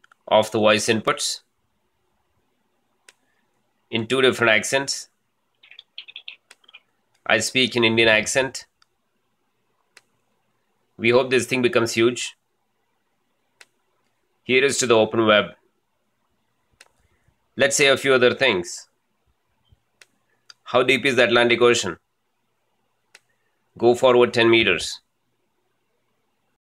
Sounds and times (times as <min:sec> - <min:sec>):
Male speech, man speaking: 0:00.3 - 0:01.5, 0:03.9 - 0:05.1, 0:07.3 - 0:08.7, 0:11.0 - 0:12.4, 0:14.5 - 0:15.6, 0:17.6 - 0:18.9, 0:20.6 - 0:22.0, 0:23.8 - 0:25.1.